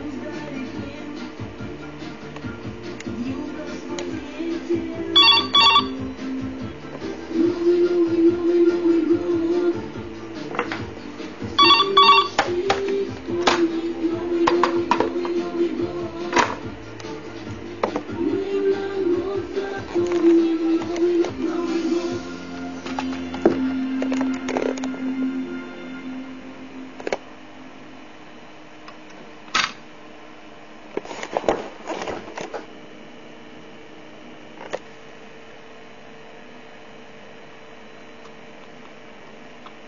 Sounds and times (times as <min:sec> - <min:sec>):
Music: 0:00.0 - 0:27.9
Telephone: 0:05.2 - 0:06.0, 0:11.6 - 0:12.6.